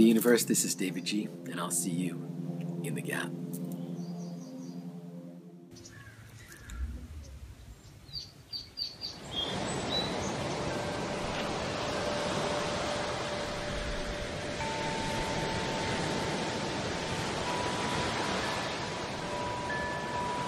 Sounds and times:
Chirp, tweet: 3.8 - 4.9, 5.8 - 10.6.

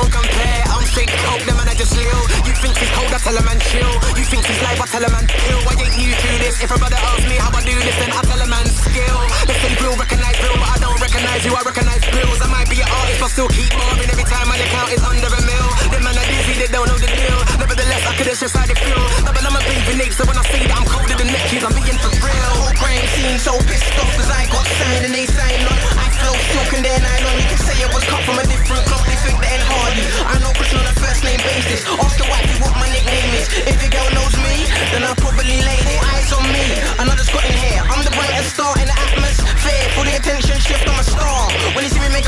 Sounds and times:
Music: 0.0 - 42.2.

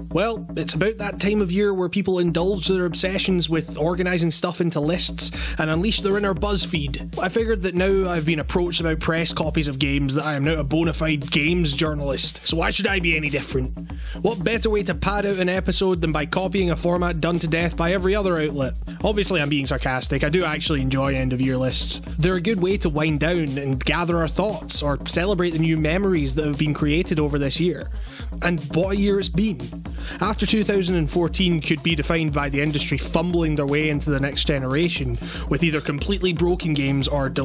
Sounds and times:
Music: 0.0 - 37.4
Speech: 0.1 - 37.4.

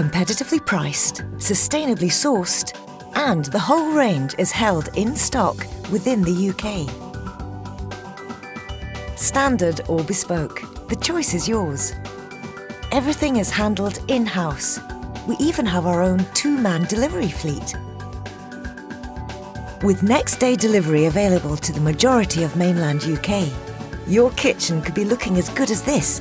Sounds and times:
Speech: 0.0 - 7.0, 9.2 - 12.0, 12.9 - 17.8, 19.8 - 26.2
Music: 0.0 - 26.2.

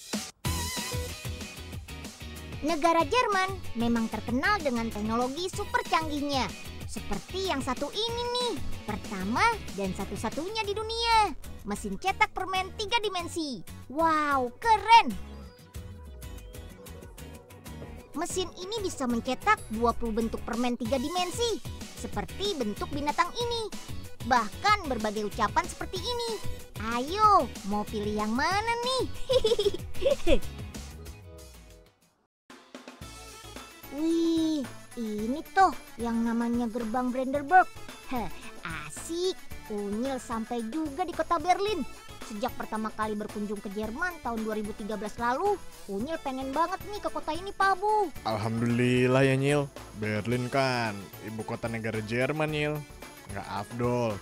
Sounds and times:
Music: 0.0 - 54.2
Speech: 18.2 - 23.7, 24.3 - 29.1, 33.9 - 54.2.

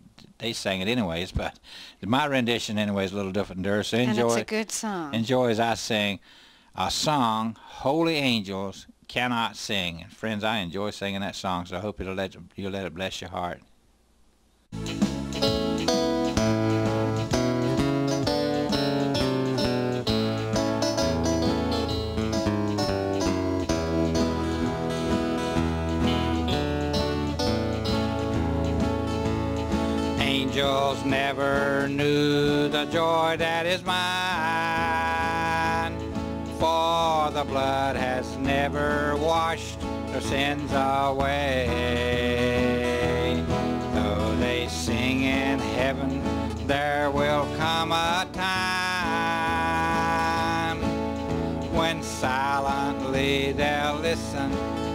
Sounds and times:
Country: 0.0 - 13.2, 14.8 - 54.9.

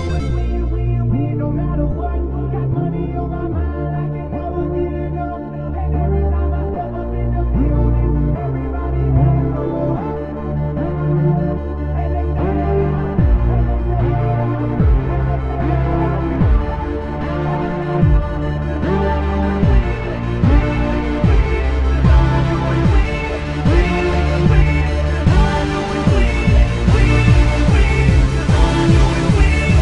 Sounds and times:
Electronic music: 0.0 - 29.8.

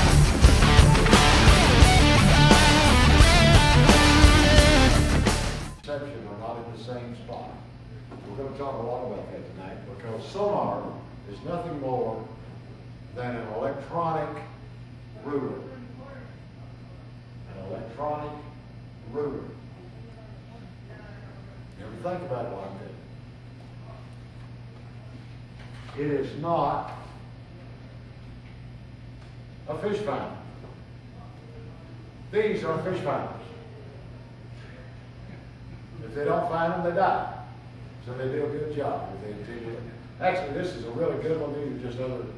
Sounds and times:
Speech: 5.8 - 12.4, 13.1 - 14.6, 15.2 - 23.1, 25.9 - 27.8, 29.7 - 30.5, 31.1 - 35.0, 35.9 - 42.3.

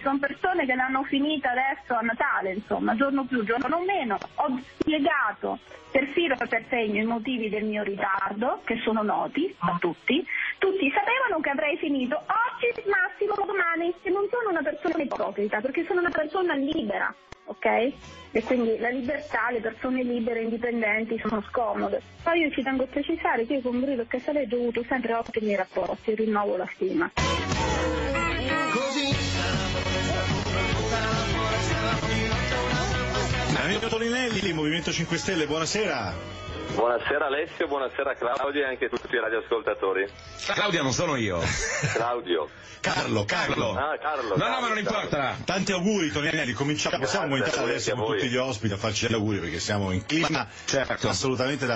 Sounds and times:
Radio: 0.1 - 17.7, 33.5 - 51.7.

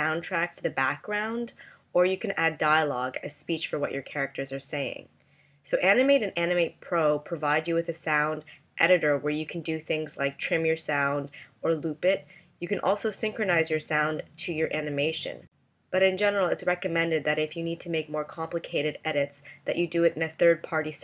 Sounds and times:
Speech: 0.0 - 5.1, 5.7 - 21.0.

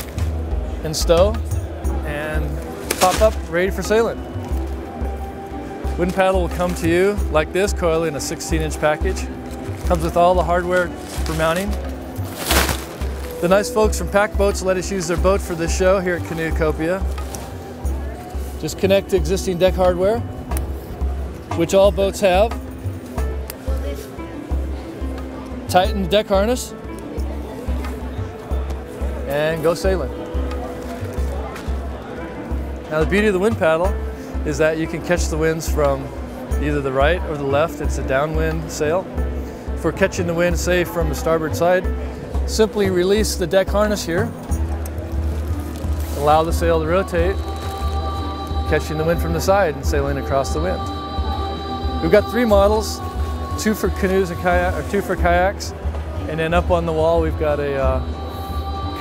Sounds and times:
Music: 0.0 - 59.0
Speech: 0.8 - 4.2, 6.0 - 11.8, 13.4 - 17.0, 18.6 - 20.2, 32.9 - 39.0, 39.8 - 41.9, 42.5 - 44.3, 46.2 - 47.4, 48.7 - 50.8, 52.0 - 53.0, 53.6 - 58.1.

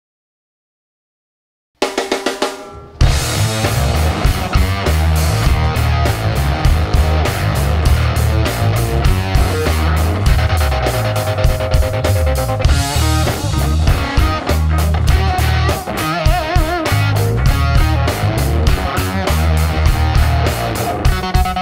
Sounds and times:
Drum roll: 1.8 - 21.6
Guitar: 2.0 - 21.6.

